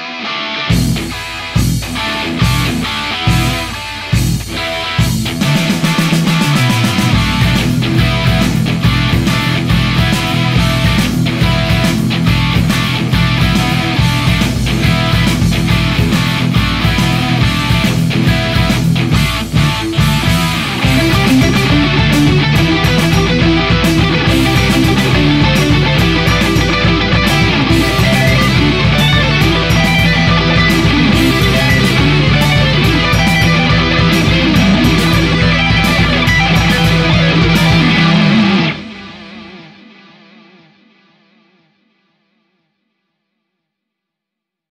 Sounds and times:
Electric guitar: 0:00.0 - 0:42.7
Strum: 0:00.7 - 0:39.7.

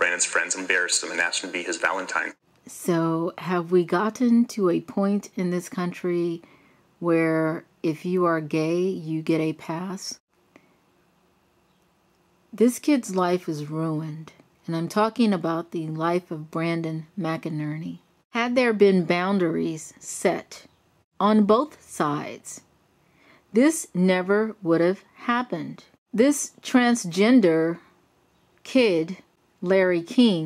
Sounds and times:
Narration, monologue: 0:00.0 - 0:30.4.

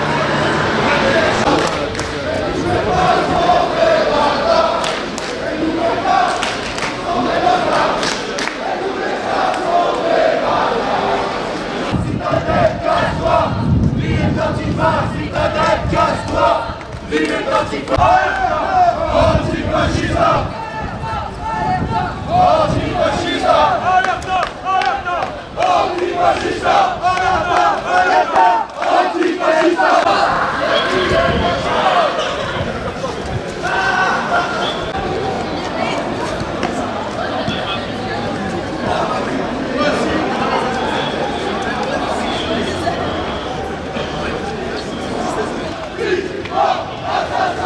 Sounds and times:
Battle cry: 0:00.0 - 0:32.7, 0:44.0 - 0:47.6
Crowd: 0:00.0 - 0:47.6.

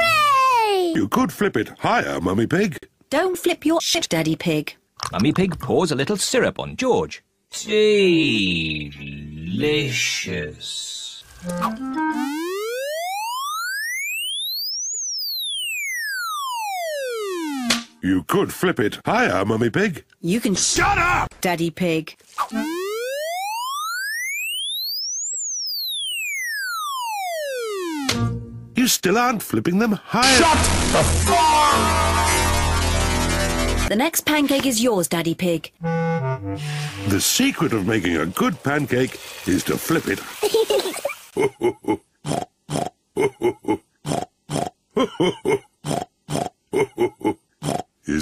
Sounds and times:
Speech: 0:05.1 - 0:11.2, 0:28.8 - 0:31.9, 0:37.1 - 0:40.3
Music: 0:11.4 - 0:12.3, 0:28.2 - 0:28.8, 0:35.8 - 0:37.2
Grunt: 0:41.8 - 0:44.8.

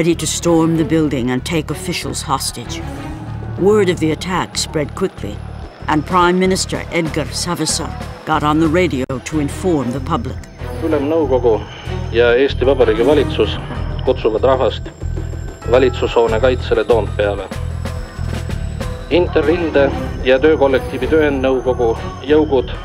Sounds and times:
Speech: 0:00.0 - 0:02.8, 0:03.6 - 0:11.6, 0:12.2 - 0:14.8, 0:15.7 - 0:17.5, 0:19.1 - 0:22.8
Music: 0:00.0 - 0:22.8.

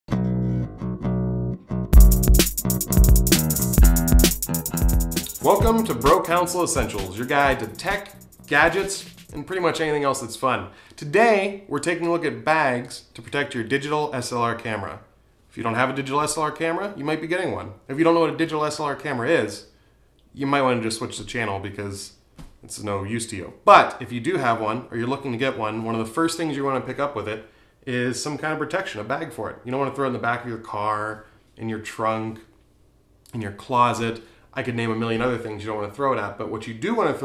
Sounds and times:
Music: 0:00.1 - 0:09.4
Speech: 0:05.4 - 0:19.7, 0:20.4 - 0:32.5, 0:33.3 - 0:37.2.

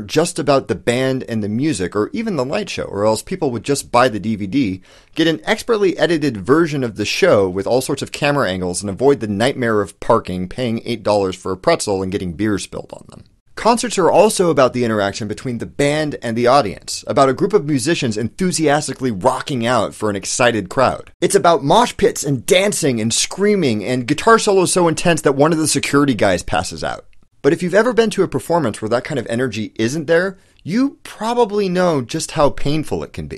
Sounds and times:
Speech: 0:00.0 - 0:33.3.

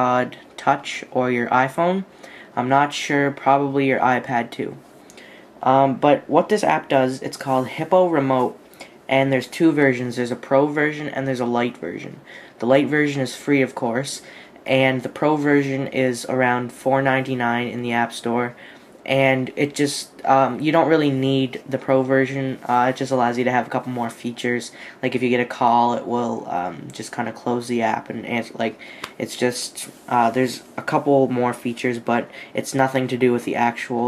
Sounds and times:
Speech: 0:00.0 - 0:04.8, 0:05.6 - 0:34.0.

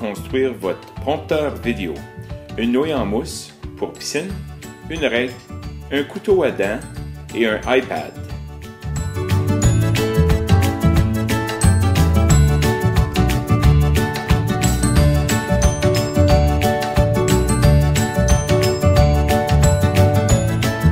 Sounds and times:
Speech: 0:00.0 - 0:08.2
Music: 0:00.0 - 0:20.9.

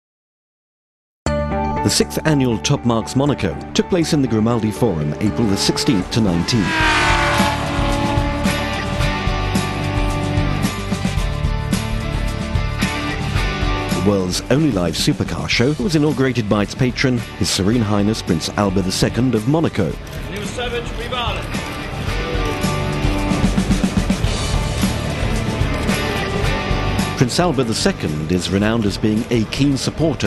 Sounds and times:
Music: 0:01.3 - 0:30.2
Speech: 0:01.8 - 0:06.7, 0:14.0 - 0:21.4, 0:27.2 - 0:30.2
Race car, auto racing: 0:04.6 - 0:10.5, 0:20.1 - 0:30.2.

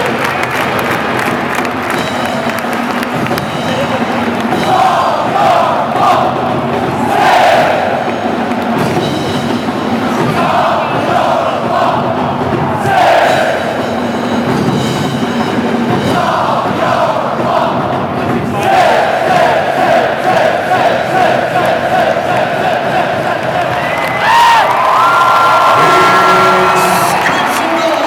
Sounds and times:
Crowd: 0:00.0 - 0:28.0.

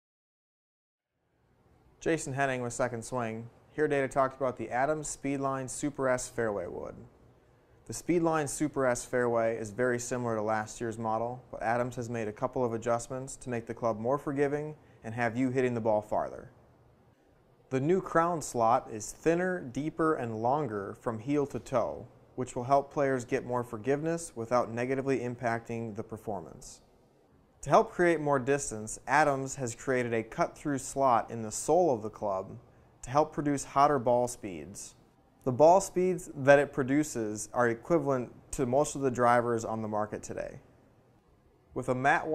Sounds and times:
Speech: 0:02.0 - 0:07.1, 0:07.9 - 0:16.6, 0:17.7 - 0:26.8, 0:27.6 - 0:40.6, 0:41.8 - 0:42.3.

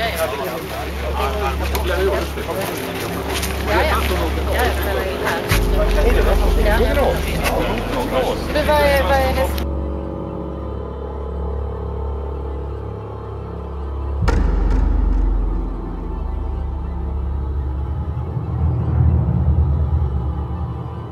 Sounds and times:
Speech: 0:00.0 - 0:09.7
Outside, urban or manmade: 0:00.0 - 0:21.1
Scary music: 0:00.0 - 0:21.1.

